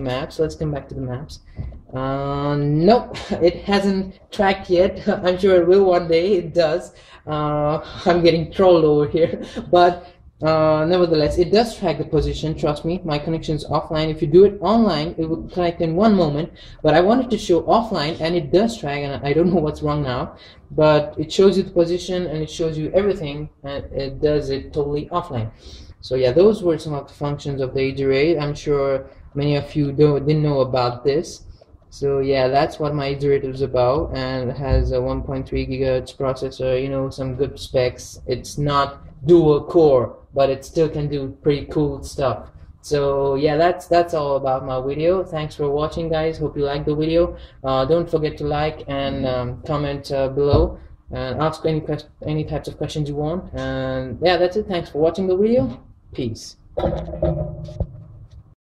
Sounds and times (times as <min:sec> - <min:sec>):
Speech: 0:00.0 - 0:31.4, 0:32.0 - 0:57.0.